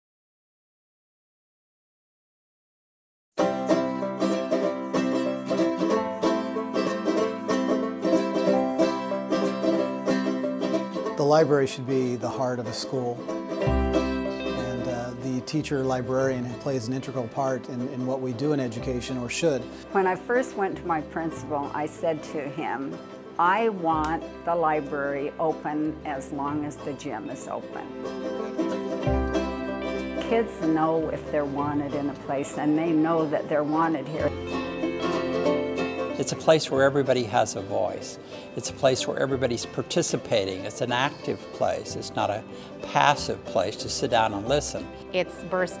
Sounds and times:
Banjo: 0:03.4 - 0:45.8
Mandolin: 0:03.4 - 0:45.8.

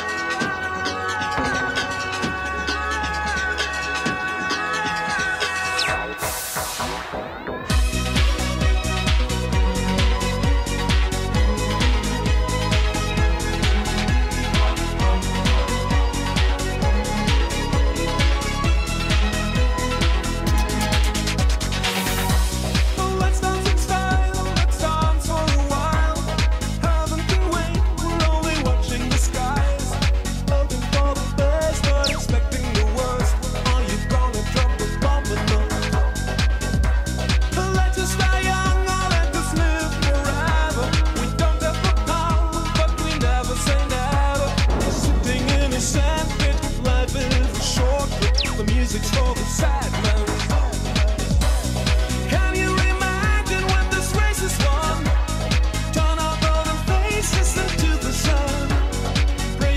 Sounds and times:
Exciting music: 0:00.0 - 0:23.0, 0:31.6 - 0:33.2, 0:40.7 - 0:52.2.

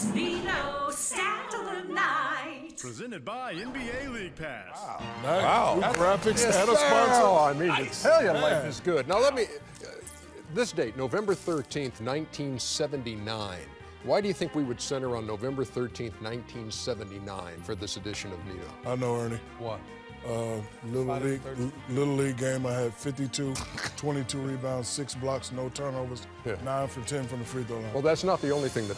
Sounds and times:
Music: 0:00.0 - 0:28.9.

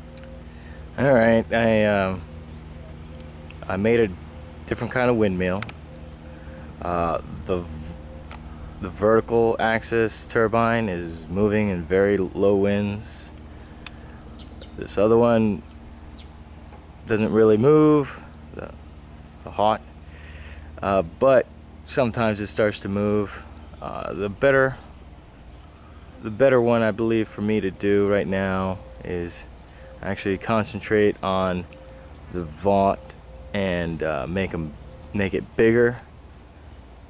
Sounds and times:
Speech: 0:01.0 - 0:02.2, 0:03.6 - 0:05.7, 0:06.8 - 0:08.0, 0:08.8 - 0:13.4, 0:14.8 - 0:15.6, 0:17.1 - 0:18.8, 0:19.4 - 0:19.8, 0:20.8 - 0:24.8, 0:26.2 - 0:31.7, 0:32.3 - 0:36.1.

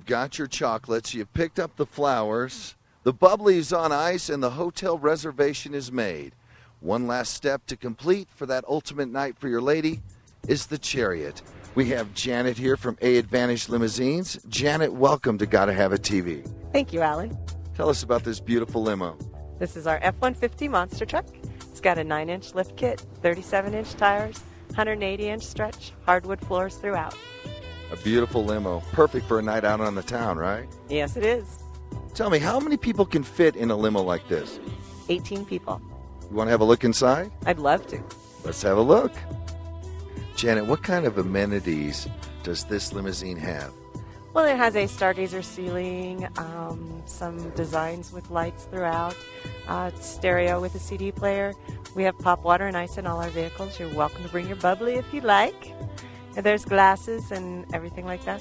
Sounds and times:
Speech: 0:00.0 - 0:21.2, 0:21.8 - 0:27.2, 0:28.0 - 0:31.6, 0:32.2 - 0:39.2, 0:40.4 - 0:43.7, 0:44.4 - 0:55.7, 0:56.4 - 0:58.4
Music: 0:09.6 - 0:58.4.

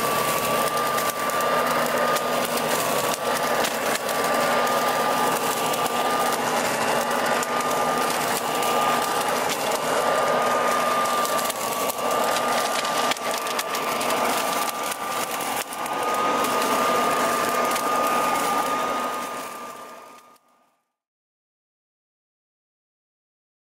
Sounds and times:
Rustling leaves: 0:00.0 - 0:20.4.

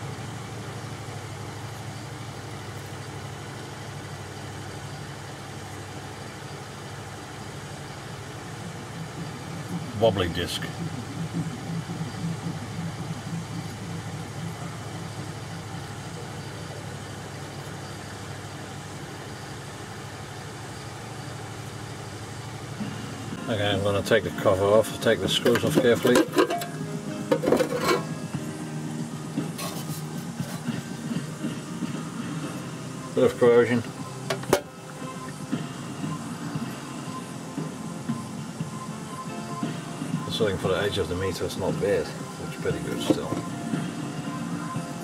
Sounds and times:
Music: 0:08.5 - 0:17.0, 0:22.3 - 0:45.0
Speech: 0:09.9 - 0:10.8, 0:23.4 - 0:26.3, 0:33.2 - 0:33.9, 0:40.3 - 0:43.4.

